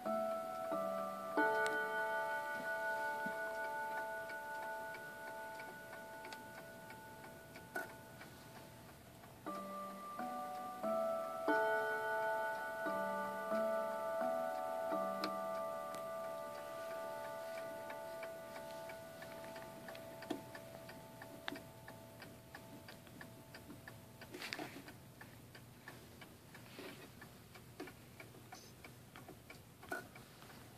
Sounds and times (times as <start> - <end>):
Tick-tock: 0.0 - 30.6.